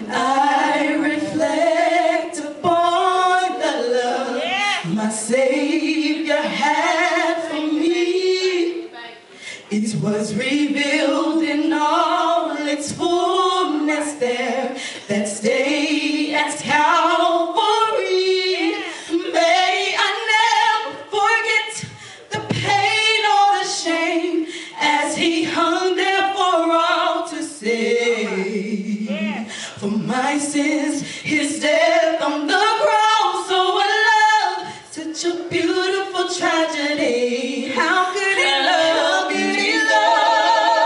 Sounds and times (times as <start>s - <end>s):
Female singing: 0.0s - 9.0s, 9.7s - 40.8s
Speech: 28.0s - 29.5s.